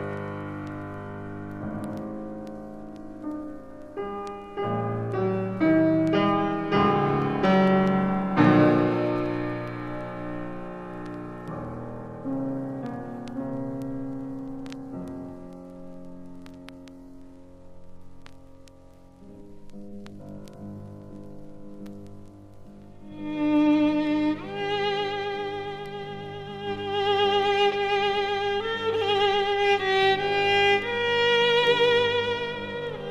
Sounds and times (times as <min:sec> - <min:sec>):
Violin, fiddle: 0:23.0 - 0:33.1.